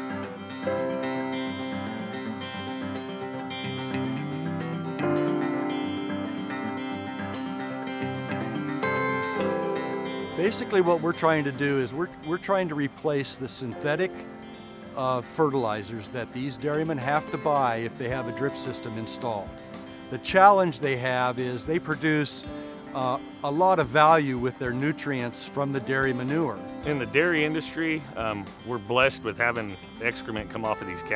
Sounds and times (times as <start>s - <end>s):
Music: 0.0s - 31.1s
Speech: 10.4s - 14.2s, 15.0s - 19.5s, 20.1s - 22.4s, 23.0s - 31.1s.